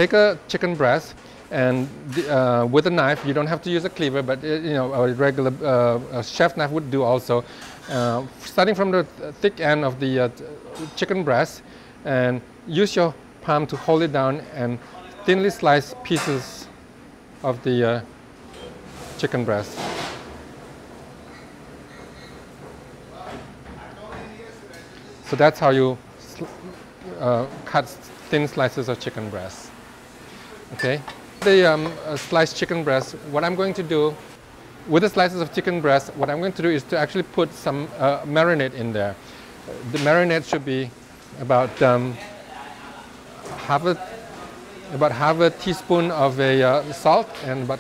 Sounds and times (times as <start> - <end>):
Speech: 0.0 - 16.8, 17.4 - 18.1, 19.2 - 19.9, 23.1 - 29.7, 30.6 - 34.2, 34.9 - 47.8.